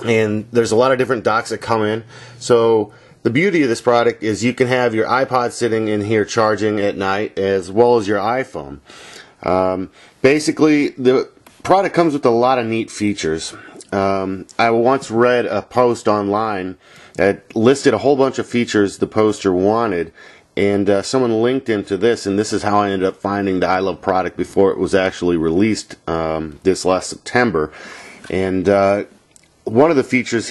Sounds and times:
Speech: 0:00.0 - 0:30.5.

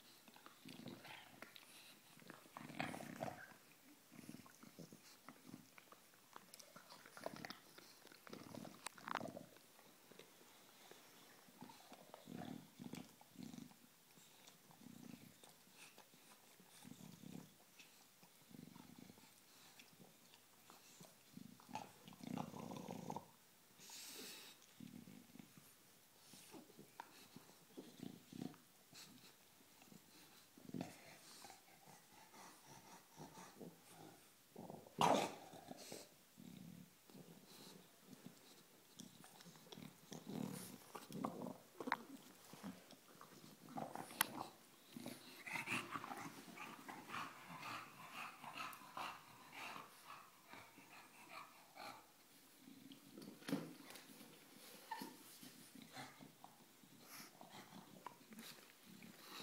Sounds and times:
Dog: 0:25.6 - 0:36.1, 0:41.8 - 0:52.2, 0:52.9 - 0:59.4.

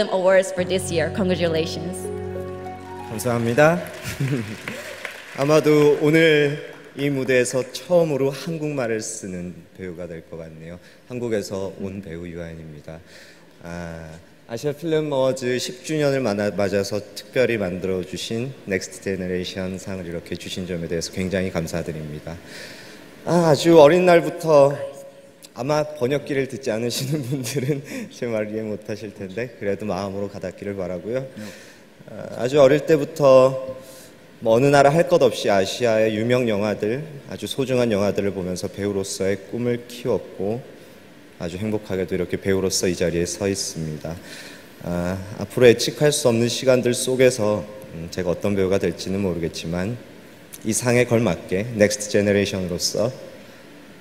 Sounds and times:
Narration, monologue: 0:00.0 - 0:54.0
Male speech, man speaking: 0:03.1 - 0:04.4, 0:05.4 - 0:13.0, 0:13.6 - 0:22.4, 0:23.3 - 0:25.0, 0:25.6 - 0:31.3, 0:32.1 - 0:33.8, 0:34.4 - 0:40.7, 0:41.4 - 0:44.2, 0:44.8 - 0:50.0, 0:50.6 - 0:53.2.

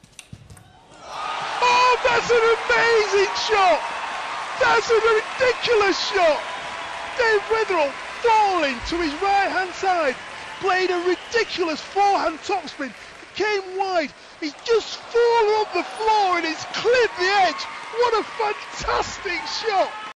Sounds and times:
Speech: 0:01.6 - 0:03.8, 0:04.6 - 0:06.5, 0:07.2 - 0:20.1.

